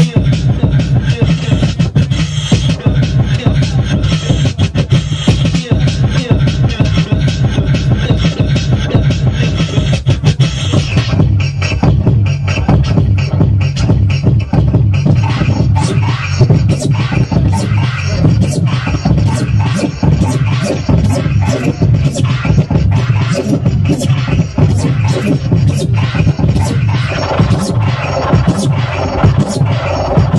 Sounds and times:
Beatboxing: 0.0 - 30.3
Electronic music: 0.0 - 30.3
Scratching (performance technique): 0.0 - 30.3.

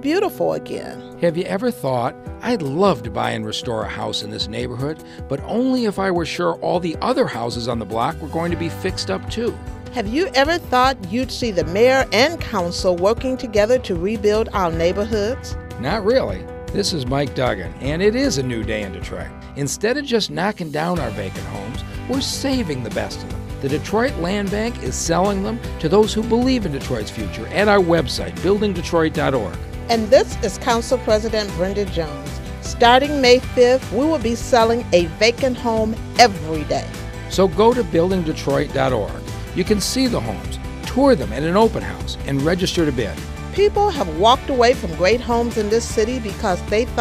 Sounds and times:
Music: 0.0 - 47.0
Speech: 0.0 - 47.0.

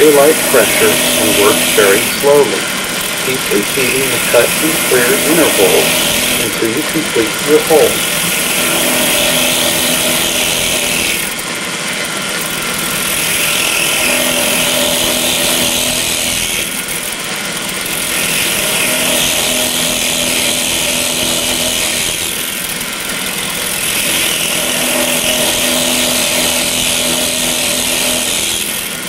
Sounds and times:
Drill: 0.0 - 29.0.

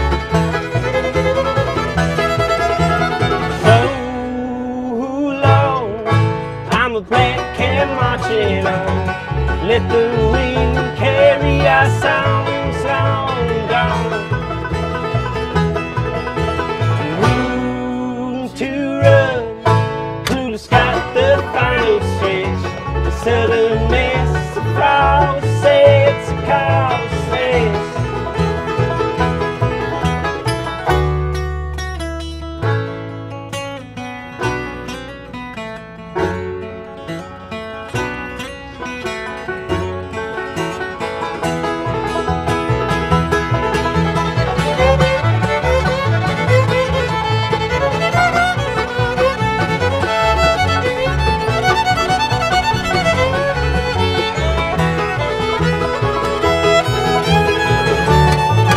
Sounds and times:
Bluegrass: 0.0 - 58.7
Guitar: 0.0 - 58.7
Mandolin: 0.0 - 58.7.

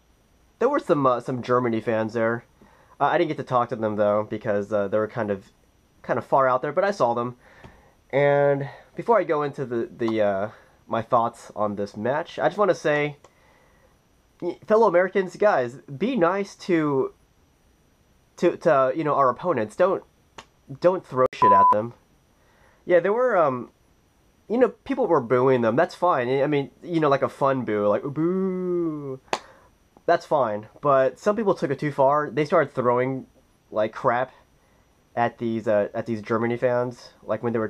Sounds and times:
Inside, small room: 0.0 - 37.6
Speech: 0.6 - 7.4, 8.1 - 13.2, 14.4 - 17.2, 18.4 - 20.1, 20.7 - 22.0, 22.9 - 23.7, 24.5 - 29.3, 30.0 - 34.4, 35.2 - 37.6.

